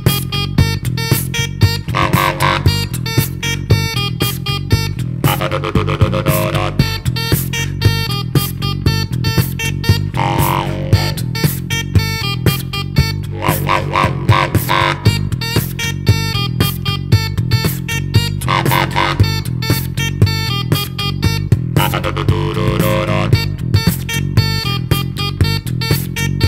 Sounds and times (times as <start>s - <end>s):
Dubstep: 0.0s - 26.4s.